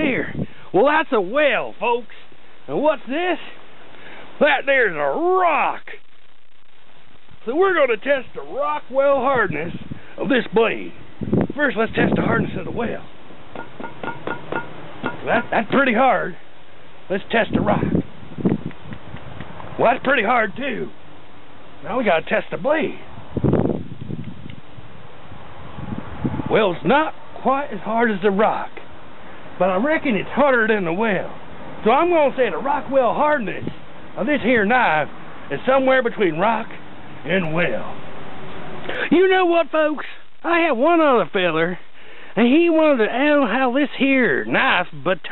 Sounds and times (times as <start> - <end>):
Speech: 0.0 - 3.6, 4.4 - 6.0, 7.4 - 11.0, 11.6 - 13.1, 15.2 - 16.4, 17.1 - 18.0, 19.8 - 21.0, 21.8 - 23.1, 26.5 - 28.8, 29.6 - 38.0, 38.9 - 41.8, 42.4 - 45.3
Outside, urban or manmade: 0.0 - 45.3.